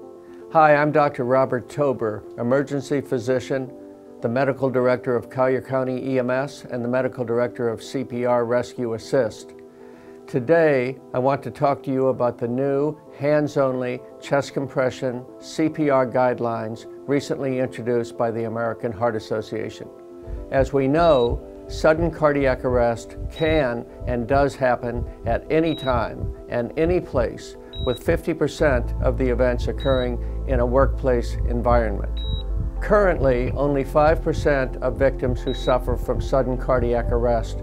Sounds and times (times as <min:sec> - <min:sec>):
Music: 0:00.0 - 0:37.6
Speech: 0:00.5 - 0:09.5, 0:10.3 - 0:19.9, 0:20.5 - 0:32.1, 0:32.8 - 0:37.6.